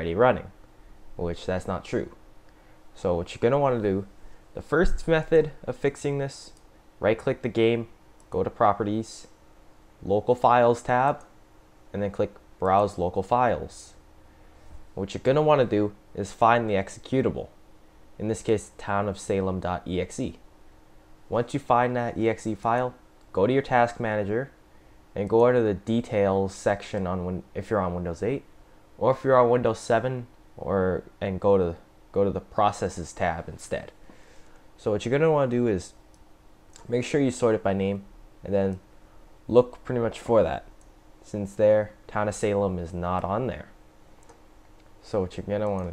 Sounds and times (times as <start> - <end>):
Speech: 0.0 - 0.6, 1.2 - 2.2, 3.0 - 9.4, 10.0 - 11.3, 11.9 - 14.0, 15.0 - 17.6, 18.2 - 20.4, 21.3 - 24.6, 25.2 - 34.0, 34.8 - 36.0, 36.8 - 38.8, 39.5 - 43.8, 45.0 - 45.9.